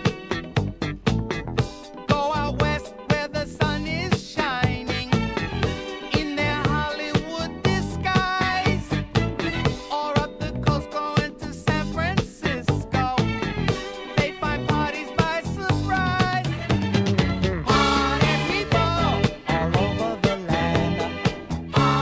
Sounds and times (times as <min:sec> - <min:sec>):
Funk: 0:00.0 - 0:22.0.